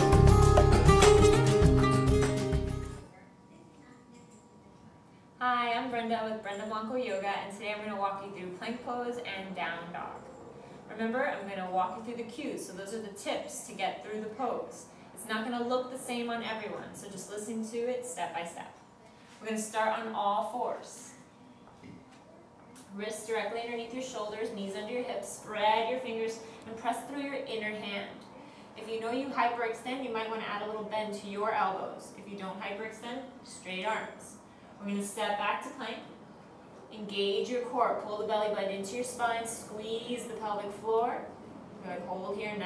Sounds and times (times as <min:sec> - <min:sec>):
Speech: 0:03.1 - 0:10.2, 0:10.9 - 0:18.8, 0:19.4 - 0:21.3, 0:22.8 - 0:36.2, 0:36.9 - 0:42.6.